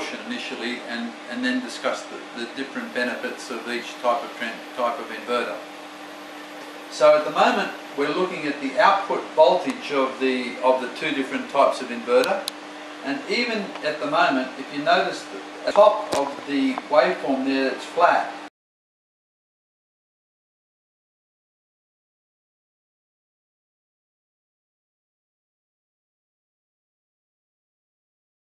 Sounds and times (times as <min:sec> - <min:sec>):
Speech: 0:00.0 - 0:05.6, 0:06.9 - 0:18.4.